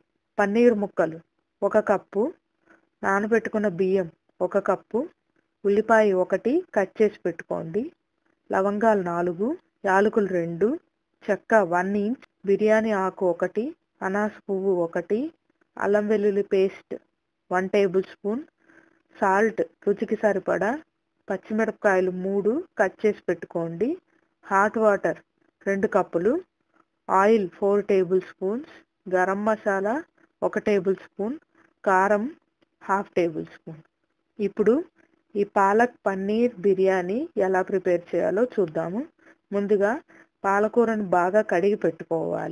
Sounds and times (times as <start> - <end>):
Speech: 0.4 - 2.4, 3.0 - 18.5, 19.2 - 26.5, 27.1 - 33.8, 34.4 - 42.5.